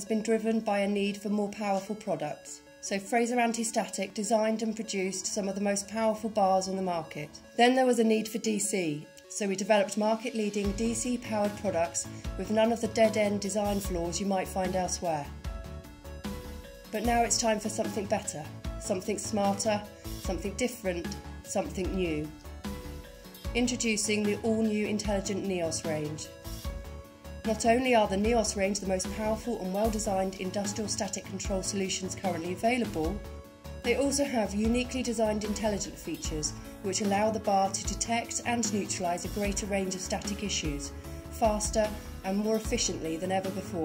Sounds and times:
Speech: 0.0 - 15.3, 17.0 - 22.3, 23.6 - 26.3, 27.5 - 33.2, 33.9 - 43.8
Music: 0.0 - 43.8.

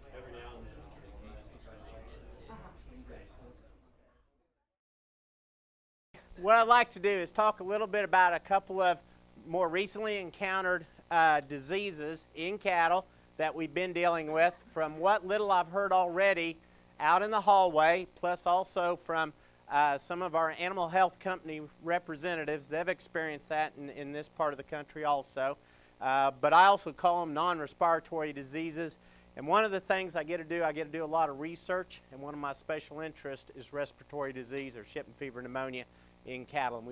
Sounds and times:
Speech: 0.0 - 4.0, 6.4 - 36.9.

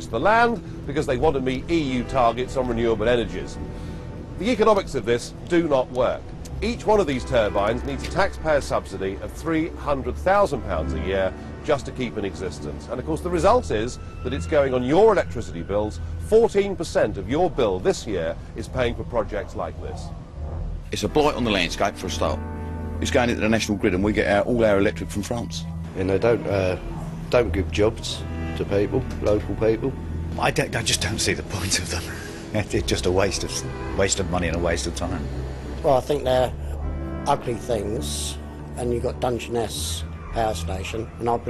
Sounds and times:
Speech: 0.0 - 3.6, 4.4 - 20.1, 20.9 - 22.4, 23.0 - 36.6, 37.3 - 41.5.

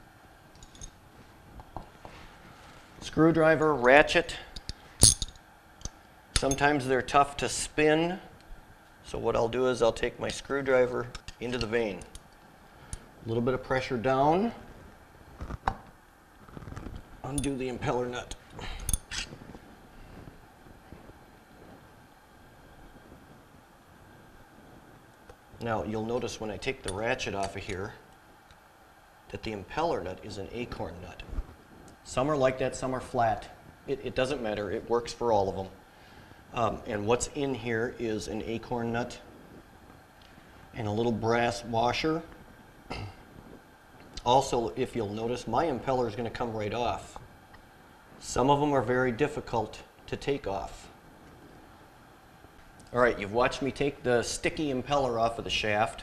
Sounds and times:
Speech: 3.0 - 4.5, 6.4 - 8.3, 9.0 - 12.1, 13.2 - 14.6, 17.2 - 18.4, 25.6 - 28.0, 29.3 - 31.3, 32.0 - 35.8, 36.6 - 39.3, 40.8 - 42.3, 44.2 - 47.2, 48.2 - 51.0, 52.9 - 56.0.

